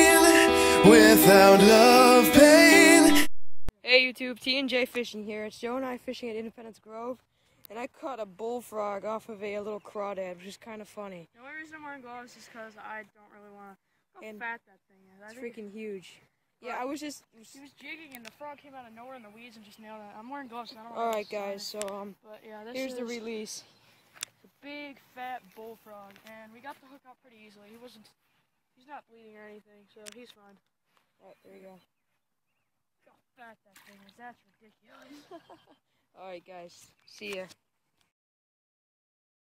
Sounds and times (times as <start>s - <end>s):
Speech: 3.8s - 23.6s, 24.6s - 28.2s, 28.8s - 30.6s, 31.2s - 31.9s, 33.1s - 35.2s, 36.2s - 37.6s.